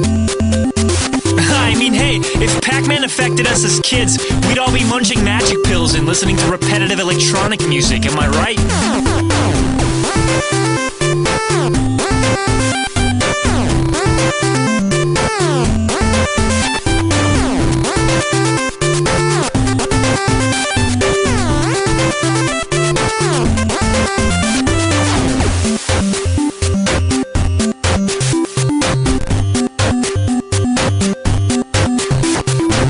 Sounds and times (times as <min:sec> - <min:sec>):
Music: 0:00.0 - 0:32.9.